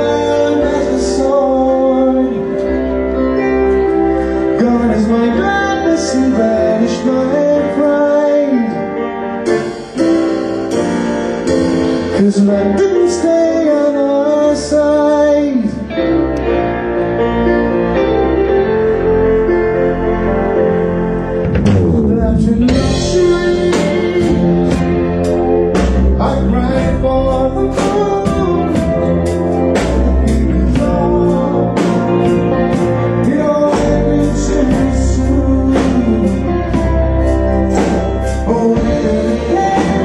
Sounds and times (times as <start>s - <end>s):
Music: 0.0s - 40.0s.